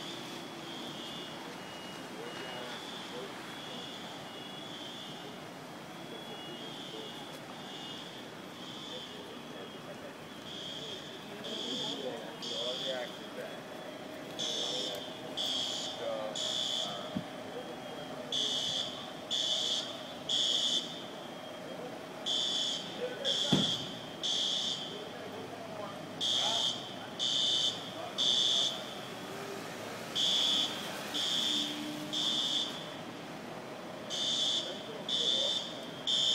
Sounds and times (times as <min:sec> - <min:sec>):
Speech: 0:01.1 - 0:04.3, 0:05.1 - 0:30.1, 0:34.4 - 0:36.3.